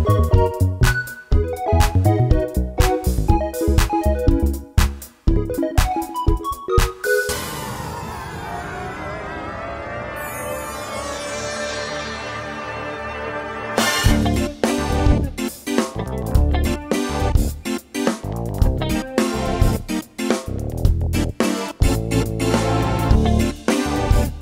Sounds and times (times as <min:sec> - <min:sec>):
Music: 0:00.0 - 0:24.4.